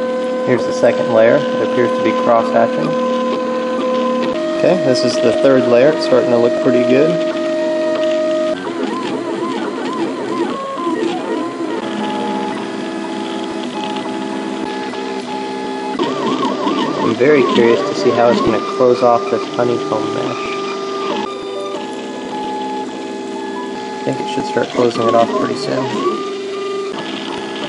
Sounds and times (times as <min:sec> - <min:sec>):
Printer: 0:00.0 - 0:27.6
Speech: 0:00.5 - 0:03.0, 0:04.6 - 0:07.2, 0:17.0 - 0:20.5, 0:24.0 - 0:26.2.